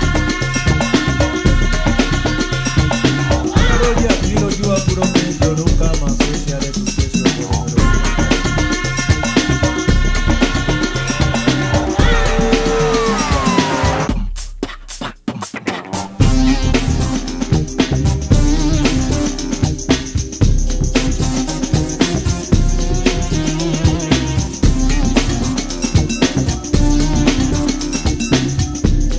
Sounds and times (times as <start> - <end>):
Music: 0.0 - 29.1.